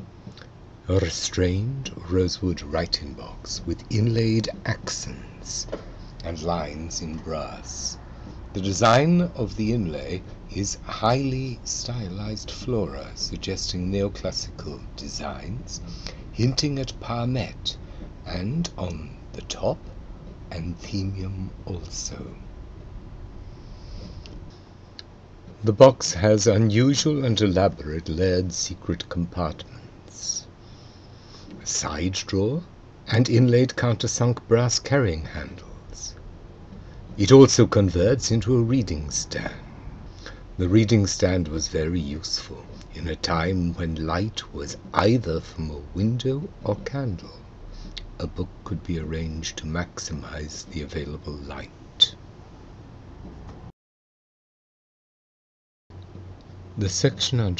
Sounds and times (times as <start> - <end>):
Speech: 0.9 - 19.9, 20.5 - 22.4, 25.6 - 30.5, 31.6 - 36.2, 37.2 - 39.7, 40.6 - 52.2, 56.8 - 57.6.